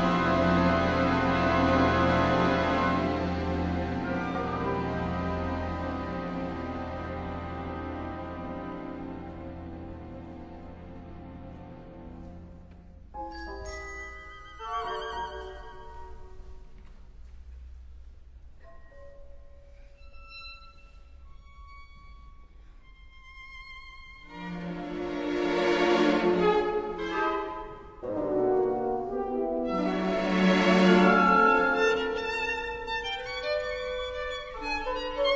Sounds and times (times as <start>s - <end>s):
Musical instrument: 13.2s - 16.5s.